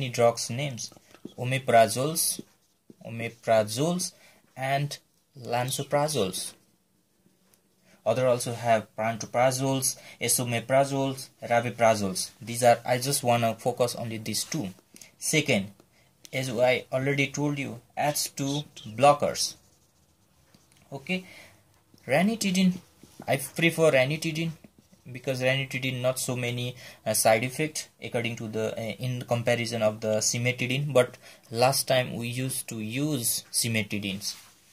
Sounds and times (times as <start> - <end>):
Speech: 0.0 - 6.6, 8.0 - 19.6, 20.9 - 21.3, 22.0 - 34.5
Inside, small room: 0.0 - 34.7
Writing: 0.8 - 5.5, 16.8 - 21.2.